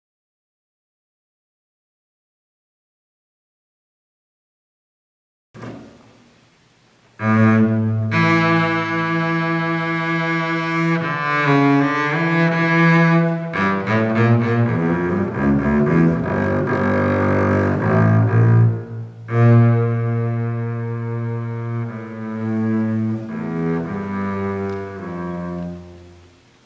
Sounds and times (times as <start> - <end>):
Double bass: 5.6 - 26.6.